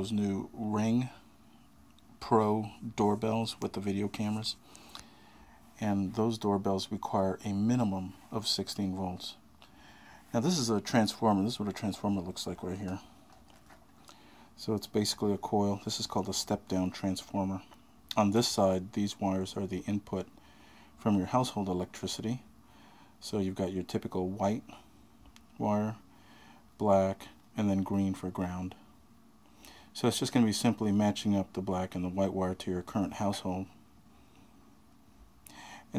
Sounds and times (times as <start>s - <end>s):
Speech: 0.0s - 1.3s, 2.2s - 4.6s, 5.8s - 9.4s, 10.3s - 13.1s, 14.6s - 20.3s, 21.0s - 22.5s, 23.2s - 24.8s, 25.6s - 26.0s, 26.8s - 28.9s, 30.0s - 33.8s.